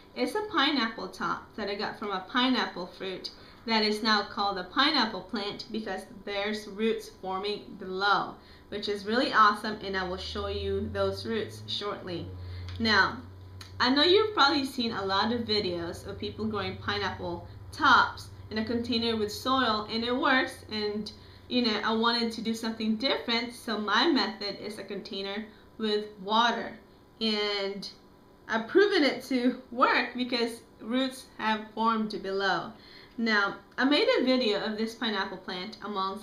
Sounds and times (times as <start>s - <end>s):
Speech: 0.2s - 36.2s.